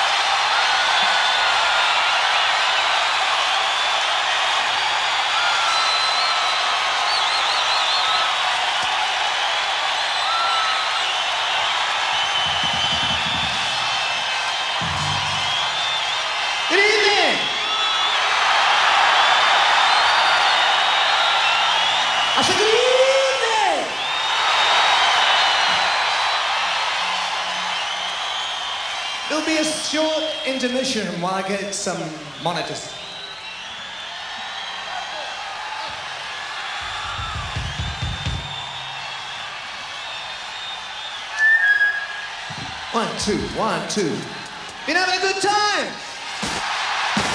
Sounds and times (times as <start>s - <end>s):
Music: 11.6s - 16.4s, 25.0s - 29.3s, 36.8s - 40.0s
Speech: 16.7s - 17.5s, 29.3s - 33.0s, 42.9s - 44.3s, 44.9s - 46.0s.